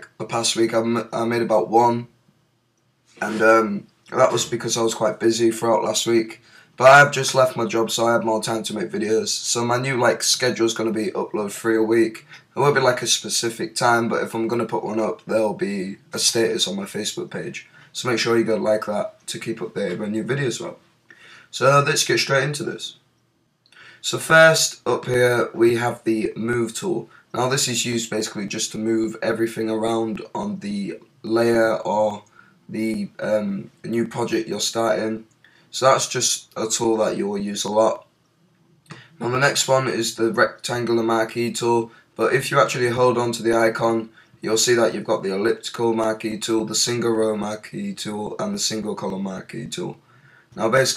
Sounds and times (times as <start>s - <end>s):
Speech: 0.0s - 2.2s, 3.2s - 20.8s, 21.5s - 23.0s, 24.0s - 38.1s, 38.9s - 50.0s, 50.6s - 50.9s.